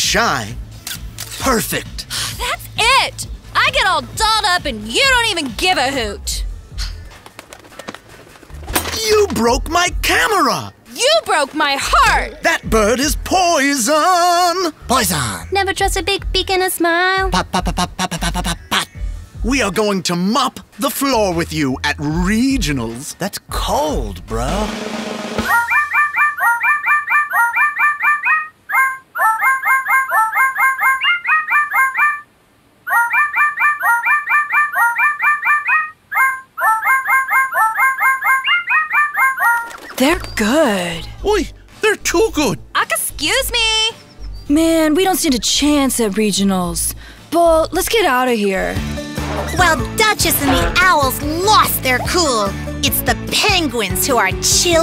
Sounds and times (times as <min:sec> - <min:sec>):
Music: 0:00.0 - 0:26.0, 0:40.0 - 0:54.8
Speech: 0:01.4 - 0:06.4, 0:19.4 - 0:24.7, 0:40.0 - 0:48.8, 0:49.6 - 0:54.8.